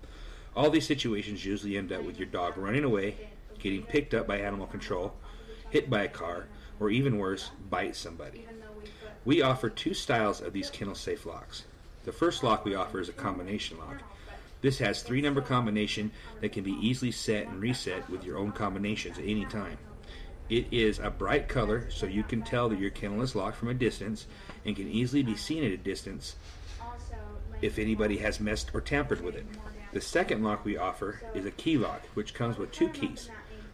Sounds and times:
Speech: 0.6 - 33.7.

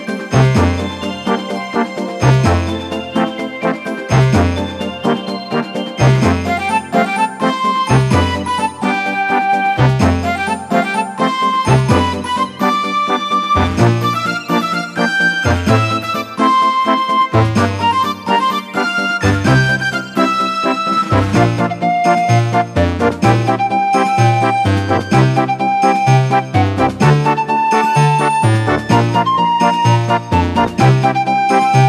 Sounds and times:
Theme music: 0.0 - 31.8.

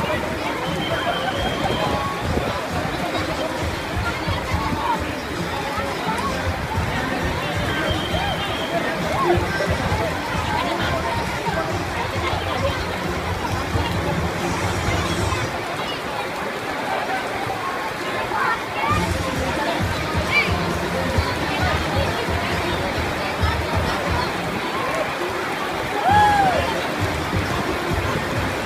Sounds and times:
Music: 0.0 - 15.6, 18.9 - 28.6
Rain on surface: 0.0 - 28.6.

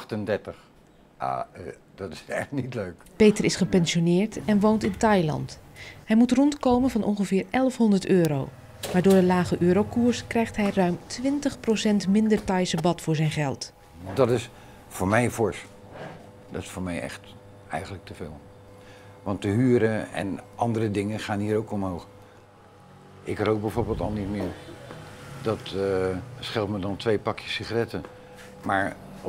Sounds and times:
Speech: 23.3 - 24.6.

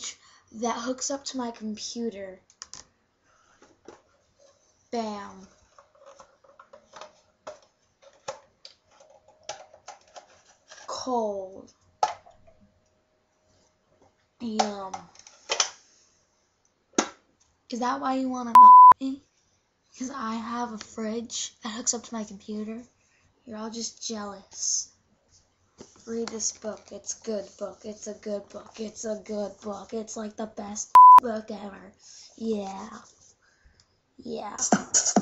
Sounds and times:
Speech: 0.0 - 2.4, 5.0 - 5.5, 10.9 - 11.7, 14.4 - 15.2, 17.7 - 19.2, 20.0 - 22.9, 23.5 - 25.0, 26.1 - 33.1, 34.2 - 34.8.

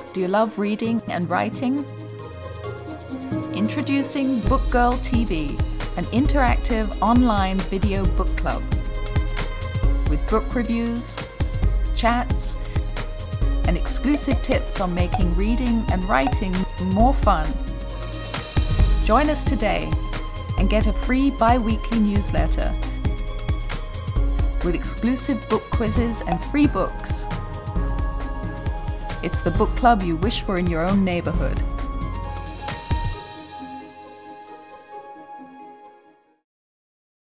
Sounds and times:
Music: 0.0 - 36.5
Speech: 0.1 - 1.9, 3.6 - 8.6, 10.1 - 11.2, 12.0 - 12.6, 13.7 - 17.6, 19.0 - 20.0, 20.6 - 22.8, 24.6 - 27.3, 29.2 - 31.6.

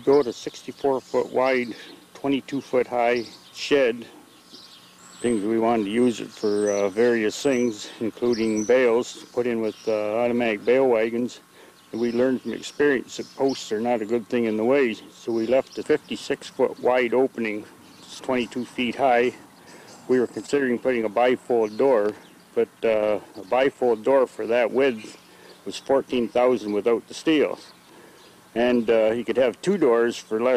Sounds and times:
Speech: 0.0 - 4.1, 5.2 - 11.4, 12.0 - 19.4, 20.1 - 27.7, 28.6 - 30.5.

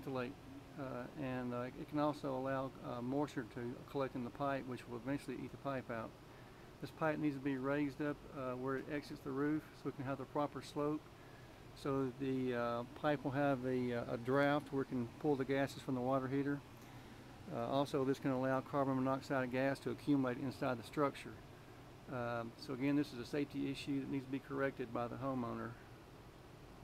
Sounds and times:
Speech: 0.0 - 6.2, 6.8 - 11.1, 11.8 - 16.6, 17.5 - 21.4, 22.1 - 25.8.

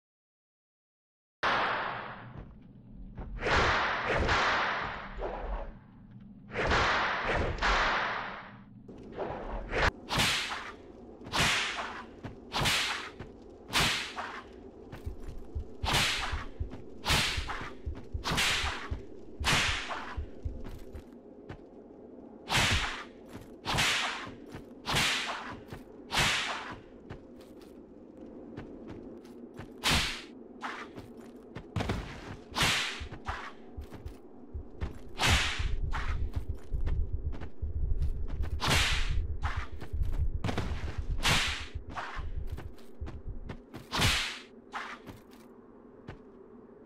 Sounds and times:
Whip: 3.4 - 5.4, 6.5 - 8.5, 9.8 - 14.5, 15.8 - 20.2, 22.5 - 23.1, 23.7 - 26.8, 29.8 - 31.1, 31.8 - 33.6, 35.2 - 36.2, 38.6 - 39.8, 40.5 - 42.2, 43.8 - 45.2.

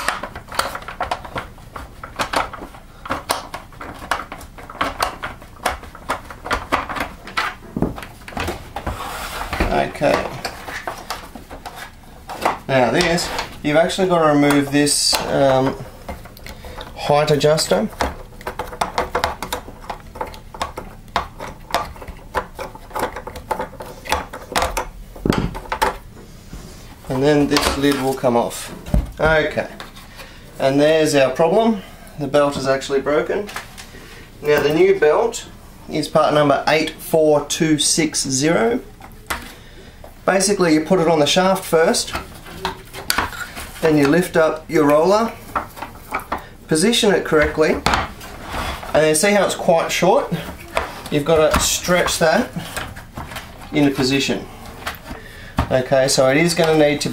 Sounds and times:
Speech: 9.6 - 10.4, 12.7 - 15.8, 17.0 - 18.0, 27.1 - 29.8, 30.6 - 33.6, 34.4 - 38.9, 40.3 - 42.2, 43.8 - 45.4, 46.7 - 47.9, 48.9 - 52.6, 53.7 - 54.5, 55.7 - 57.1.

